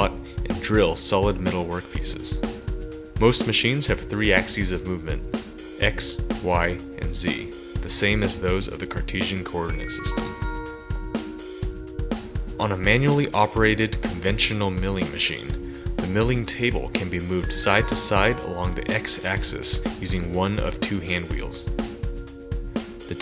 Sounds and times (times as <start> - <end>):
Speech: 0.0 - 2.4, 3.2 - 5.2, 5.8 - 10.4, 12.6 - 21.7
Music: 0.0 - 23.2.